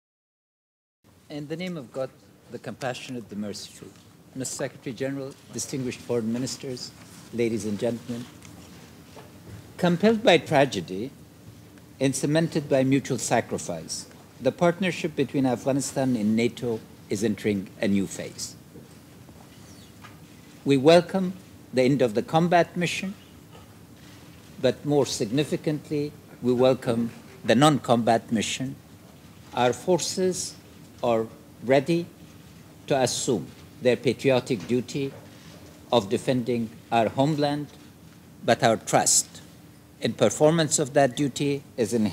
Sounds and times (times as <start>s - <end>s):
Male speech, man speaking: 1.3s - 8.4s, 9.8s - 11.2s, 12.0s - 18.6s, 20.6s - 23.2s, 24.6s - 28.8s, 29.5s - 32.1s, 32.9s - 35.2s, 35.9s - 37.8s, 38.4s - 42.1s.